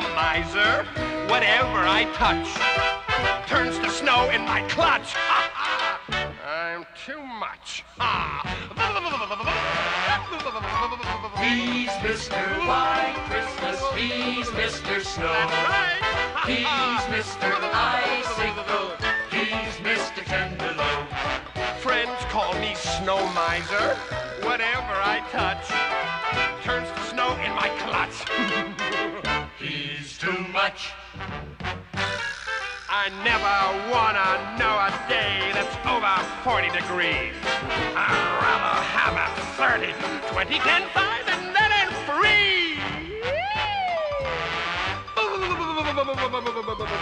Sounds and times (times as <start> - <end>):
Music: 0.0 - 47.0.